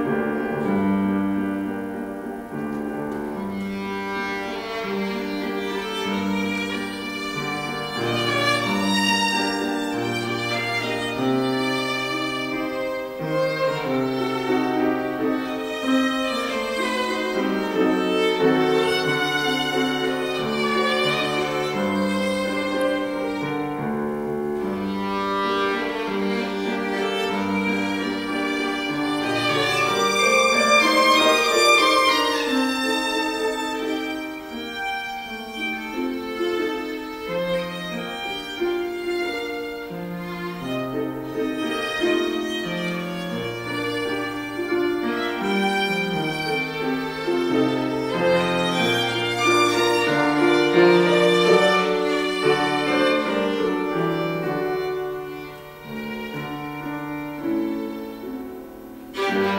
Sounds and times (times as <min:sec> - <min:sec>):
Violin, fiddle: 0:00.0 - 0:59.5.